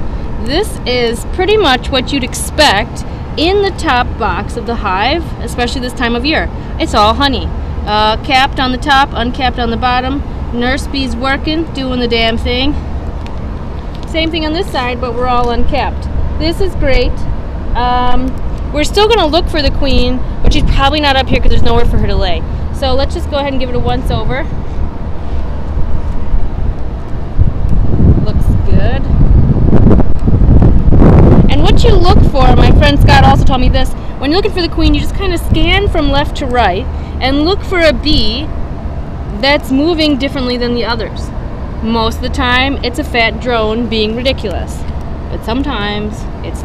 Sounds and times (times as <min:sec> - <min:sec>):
Outside, urban or manmade: 0:00.0 - 0:46.6
Speech: 0:00.4 - 0:12.8, 0:14.1 - 0:17.2, 0:17.8 - 0:24.5, 0:28.2 - 0:29.0, 0:31.5 - 0:38.5, 0:39.4 - 0:46.6
Wind noise (microphone): 0:14.9 - 0:38.5.